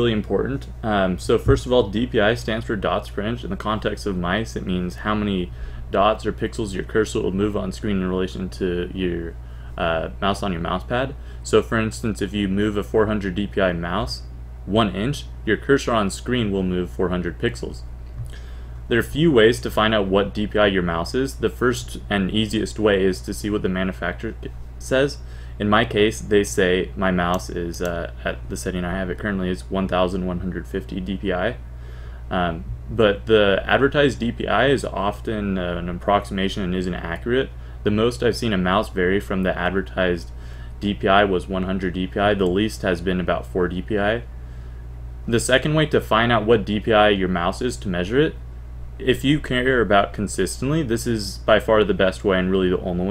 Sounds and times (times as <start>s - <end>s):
Speech: 0.0s - 17.9s, 18.9s - 31.6s, 32.3s - 44.3s, 45.3s - 48.4s, 49.0s - 53.1s.